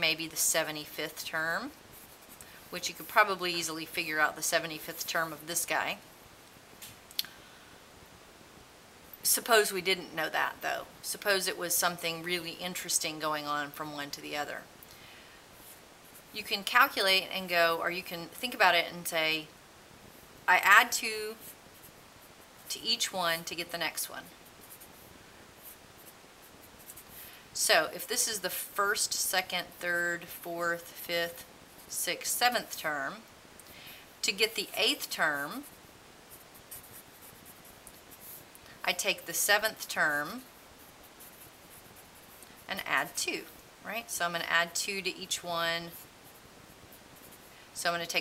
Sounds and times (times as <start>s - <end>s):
Speech: 0.0s - 1.8s, 2.7s - 6.0s, 9.2s - 14.7s, 16.4s - 19.5s, 20.5s - 21.4s, 22.7s - 24.3s, 27.6s - 33.3s, 34.2s - 35.7s, 38.8s - 40.5s, 42.7s - 46.0s, 47.8s - 48.2s
Writing: 0.6s - 3.3s, 21.3s - 27.3s, 34.7s - 43.3s, 45.9s - 47.5s.